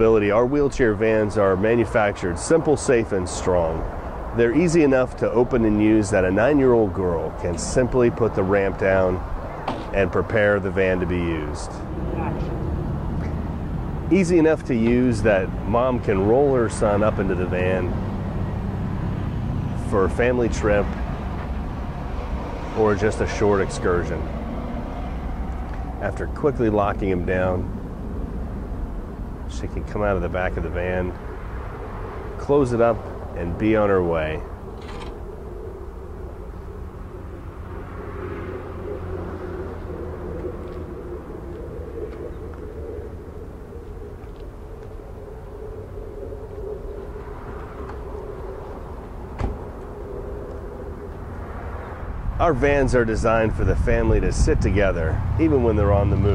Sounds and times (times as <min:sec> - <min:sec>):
Speech: 0:00.0 - 0:09.2, 0:09.9 - 0:12.5, 0:14.1 - 0:18.0, 0:19.8 - 0:21.0, 0:22.7 - 0:24.3, 0:26.0 - 0:27.7, 0:29.5 - 0:31.2, 0:32.4 - 0:34.5, 0:52.4 - 0:56.3.